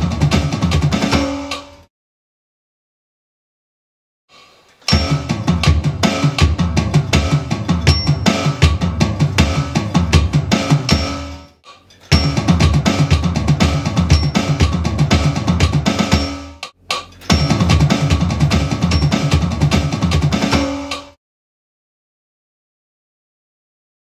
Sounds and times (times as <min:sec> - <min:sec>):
Music: 0:00.0 - 0:01.9, 0:04.3 - 0:21.2.